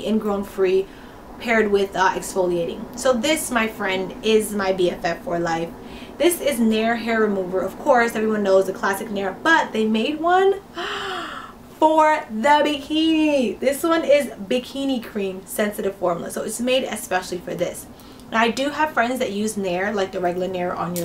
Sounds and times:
Speech: 0:00.0 - 0:10.6, 0:11.8 - 0:21.0
Inside, small room: 0:00.0 - 0:21.0.

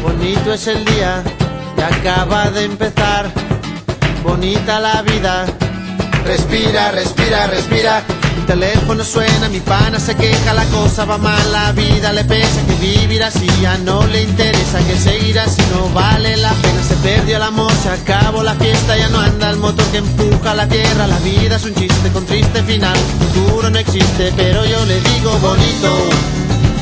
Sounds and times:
Funny music: 0:00.0 - 0:26.8.

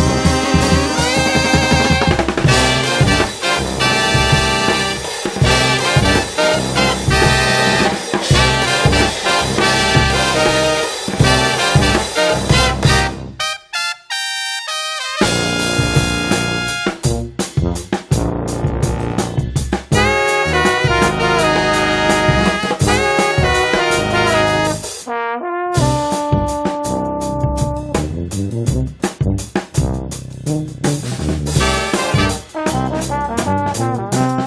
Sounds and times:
Trumpet: 0:00.0 - 0:28.9, 0:29.8 - 0:34.4
Trombone: 0:00.0 - 0:34.4.

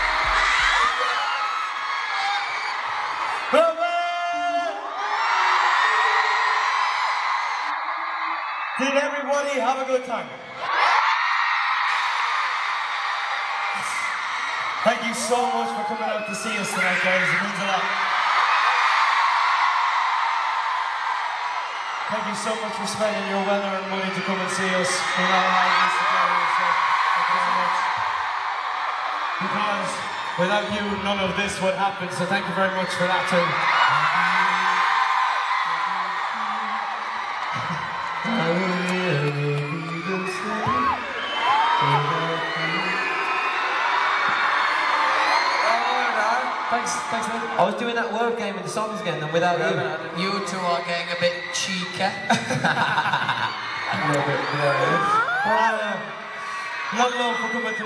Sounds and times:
Male speech, man speaking: 0:03.5 - 0:04.8, 0:08.8 - 0:10.3, 0:14.8 - 0:17.9, 0:22.1 - 0:28.0, 0:29.4 - 0:34.8, 0:38.3 - 0:41.0, 0:41.8 - 0:43.2, 0:45.6 - 0:52.8, 0:53.9 - 0:56.2, 0:56.9 - 0:57.8.

